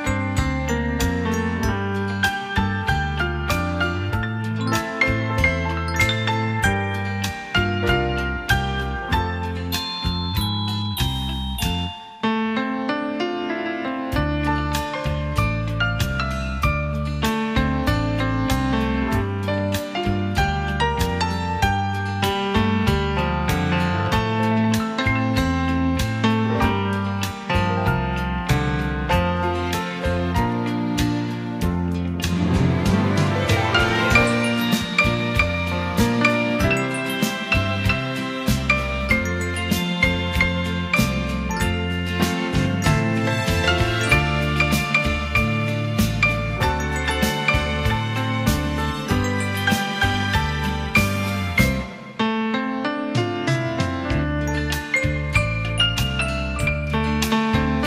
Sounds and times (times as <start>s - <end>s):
Music: 0.0s - 57.8s.